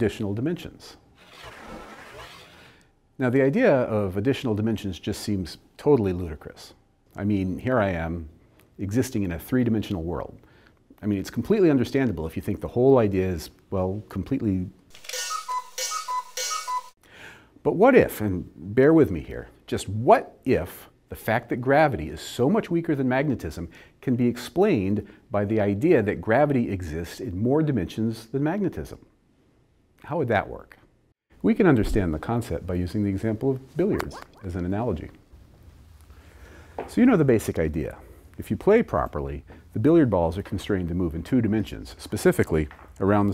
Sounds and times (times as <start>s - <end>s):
Alarm clock: 15.0s - 16.9s.